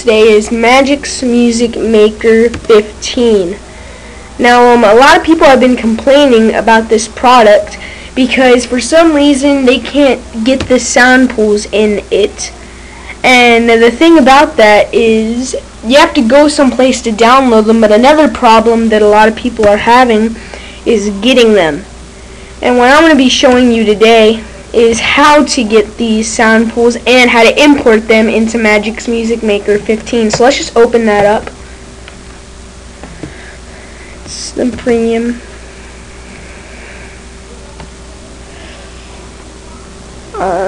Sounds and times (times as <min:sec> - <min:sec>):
Speech: 0:00.0 - 0:03.6, 0:04.4 - 0:21.9, 0:22.6 - 0:31.5, 0:34.3 - 0:35.4, 0:40.4 - 0:40.6.